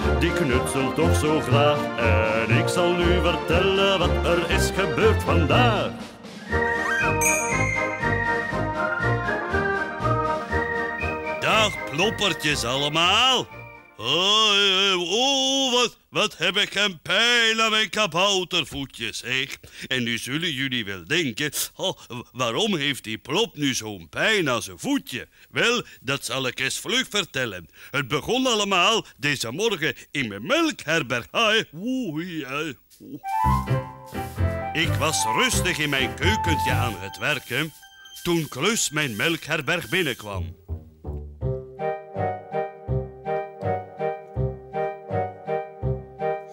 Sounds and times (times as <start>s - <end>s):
Music: 0.0s - 14.2s, 33.2s - 46.5s
Speech: 0.1s - 1.4s, 11.4s - 33.3s, 34.8s - 40.6s.